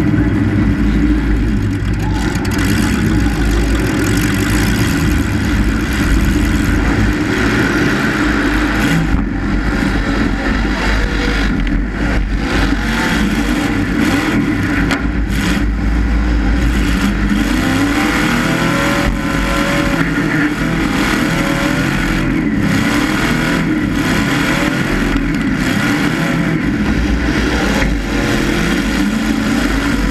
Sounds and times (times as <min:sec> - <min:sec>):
Car: 0:00.0 - 0:30.1.